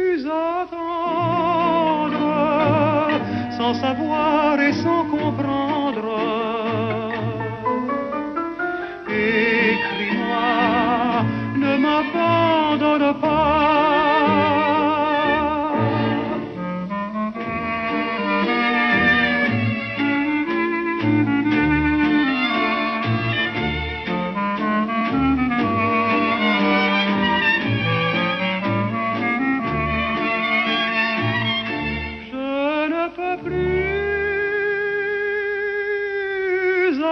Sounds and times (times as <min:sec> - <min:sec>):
Violin, fiddle: 0:08.3 - 0:32.7.